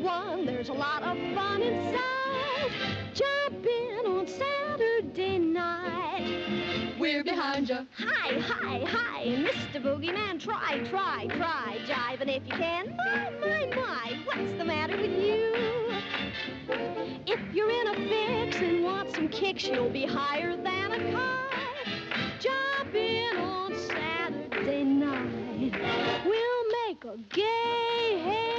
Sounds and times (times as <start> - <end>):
Music: 0.0 - 28.5.